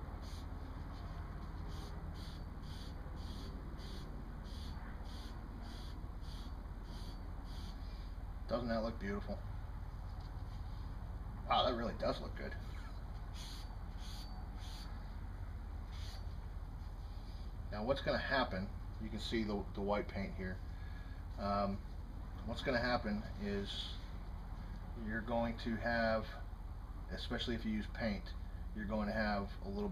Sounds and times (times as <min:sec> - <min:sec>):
Speech: 0:08.5 - 0:09.4, 0:11.5 - 0:12.6, 0:17.7 - 0:20.6, 0:21.4 - 0:21.8, 0:22.4 - 0:24.0, 0:25.0 - 0:26.4, 0:27.1 - 0:29.9.